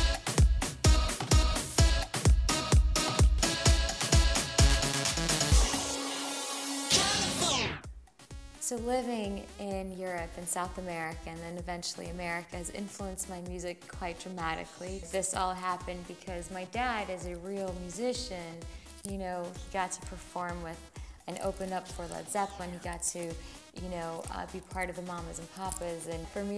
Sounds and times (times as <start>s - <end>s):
Music: 0.0s - 26.5s
Speech: 8.6s - 26.5s.